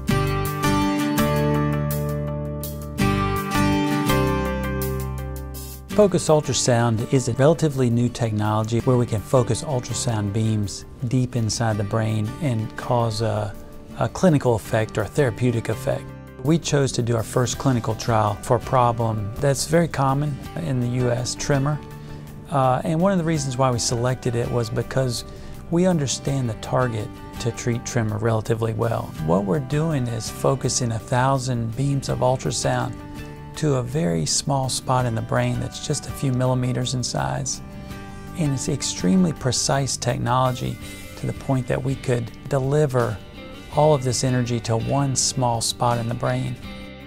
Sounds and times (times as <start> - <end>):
Music: 0.0 - 47.0
Speech: 5.9 - 21.8, 22.5 - 33.0, 33.6 - 37.6, 38.4 - 46.7.